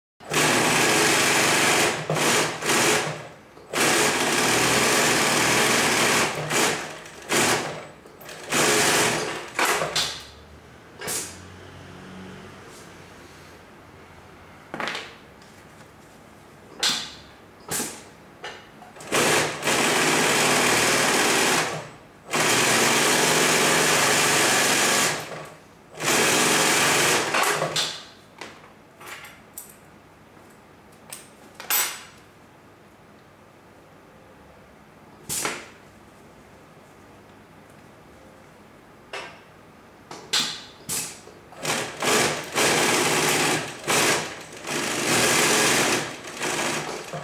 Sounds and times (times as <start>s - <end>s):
Sewing machine: 0.2s - 10.2s, 19.0s - 28.0s, 41.6s - 47.2s.